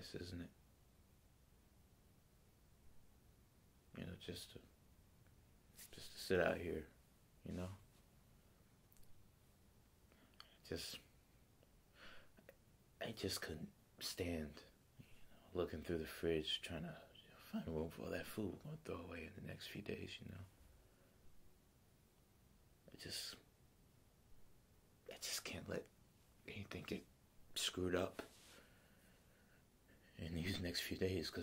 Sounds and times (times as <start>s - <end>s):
Narration, monologue: 0.0s - 0.9s, 2.9s - 9.3s, 10.0s - 31.4s.